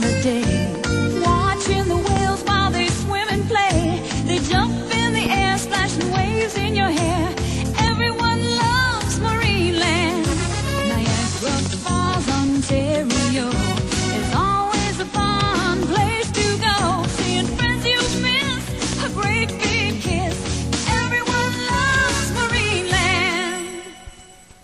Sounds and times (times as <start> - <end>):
Pop music: 0.0 - 24.0.